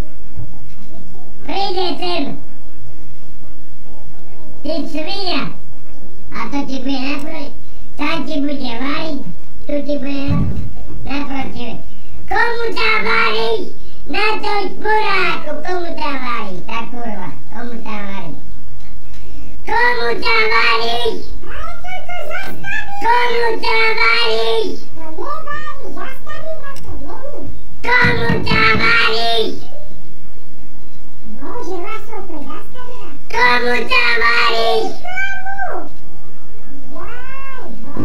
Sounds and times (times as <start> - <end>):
Speech: 1.4 - 2.4, 19.7 - 29.8, 31.4 - 35.9.